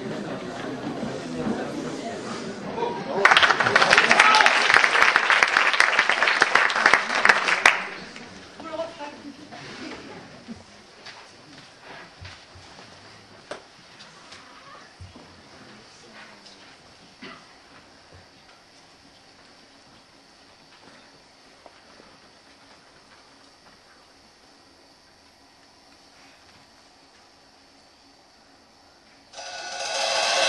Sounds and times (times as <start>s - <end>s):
Speech: 7.8s - 11.7s, 15.6s - 16.8s.